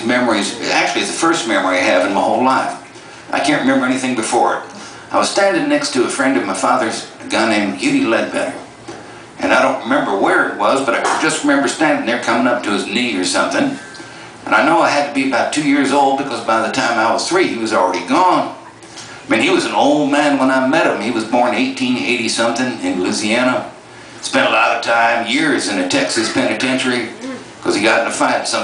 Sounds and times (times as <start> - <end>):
Speech: 0.0 - 8.7, 9.4 - 18.6, 19.2 - 28.6.